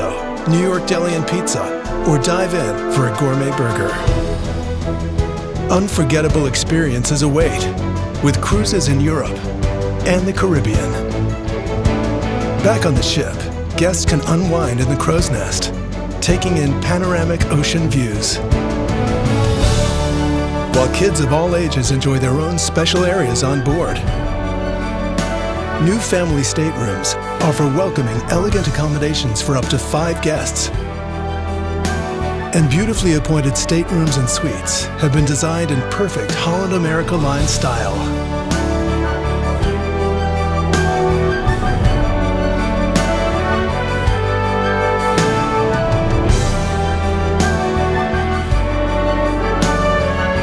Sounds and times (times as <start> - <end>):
Background music: 0.0 - 50.4.